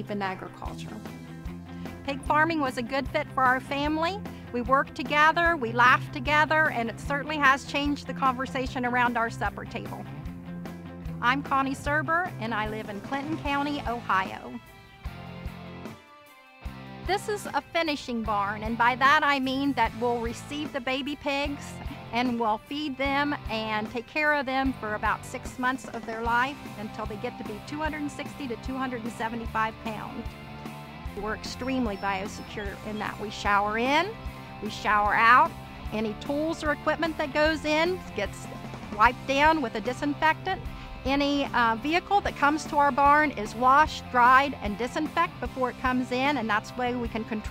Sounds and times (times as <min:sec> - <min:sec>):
Speech: 0:00.0 - 0:01.0, 0:02.1 - 0:10.1, 0:11.2 - 0:14.6, 0:17.1 - 0:30.2, 0:31.2 - 0:38.4, 0:39.0 - 0:47.5
Music: 0:00.0 - 0:47.5.